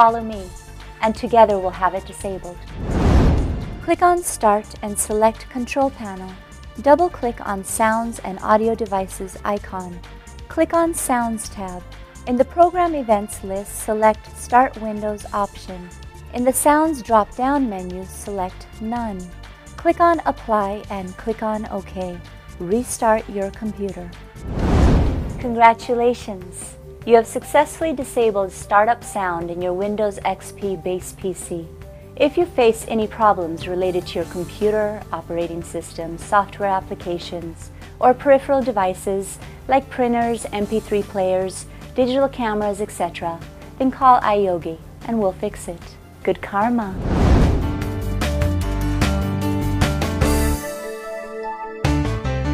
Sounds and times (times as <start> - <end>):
Speech: 0.0 - 2.6, 3.8 - 24.2, 25.4 - 47.0
Music: 0.0 - 52.5.